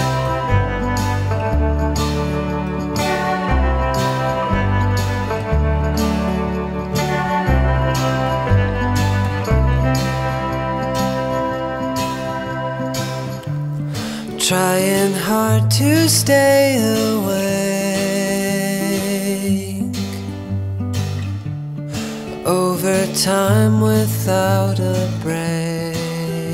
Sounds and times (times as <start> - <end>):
Music: 0.0 - 26.5.